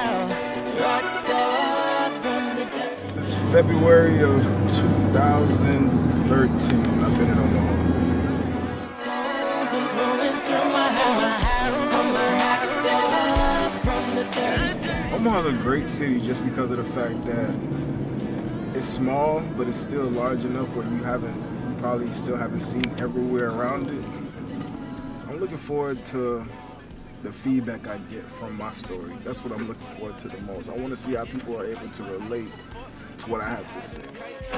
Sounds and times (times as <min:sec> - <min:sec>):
Music: 0:00.0 - 0:34.5
Speech: 0:03.0 - 0:07.8, 0:15.1 - 0:17.6, 0:18.7 - 0:24.2, 0:25.3 - 0:26.6, 0:27.2 - 0:34.5.